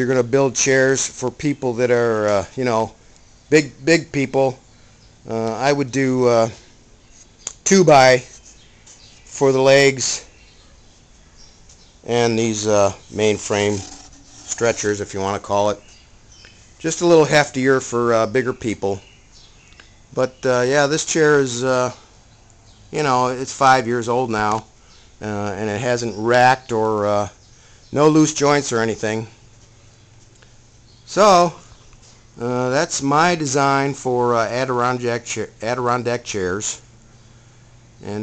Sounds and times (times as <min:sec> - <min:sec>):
Speech: 0:00.0 - 0:04.6, 0:05.3 - 0:06.6, 0:07.6 - 0:08.4, 0:09.3 - 0:10.3, 0:12.1 - 0:15.8, 0:16.8 - 0:19.0, 0:20.2 - 0:22.0, 0:23.0 - 0:27.4, 0:28.0 - 0:29.4, 0:31.1 - 0:31.6, 0:32.4 - 0:36.9.